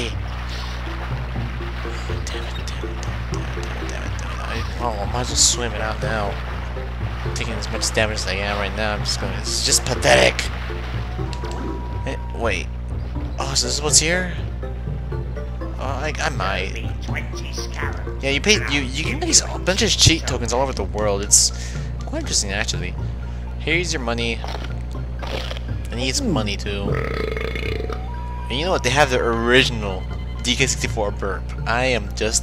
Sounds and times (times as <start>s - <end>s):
Music: 0.0s - 32.4s
Speech: 3.9s - 6.4s, 7.4s - 10.5s, 12.1s - 12.7s, 13.4s - 14.4s, 15.8s - 23.0s, 23.6s - 24.4s, 25.9s - 27.0s, 28.5s - 32.4s.